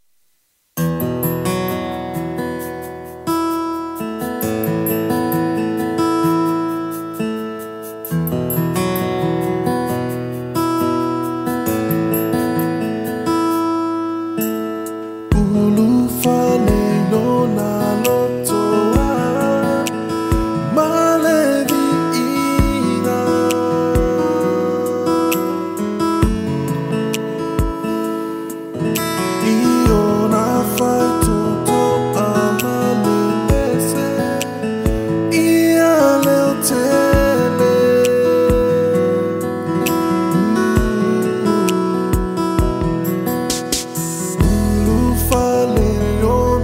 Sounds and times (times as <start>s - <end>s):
Background music: 1.0s - 46.6s.